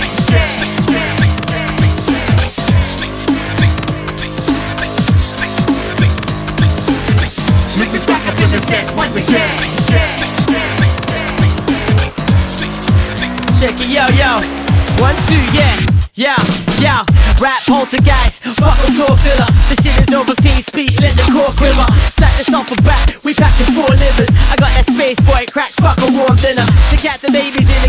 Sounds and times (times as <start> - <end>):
Music: 0.0 - 27.8.